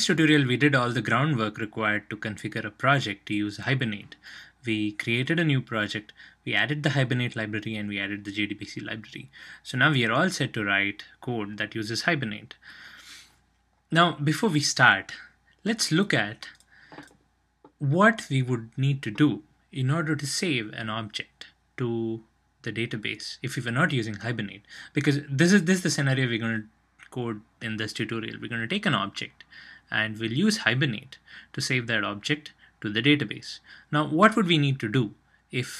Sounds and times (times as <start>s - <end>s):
Speech: 0.0s - 12.6s, 13.9s - 16.6s, 17.8s - 35.7s.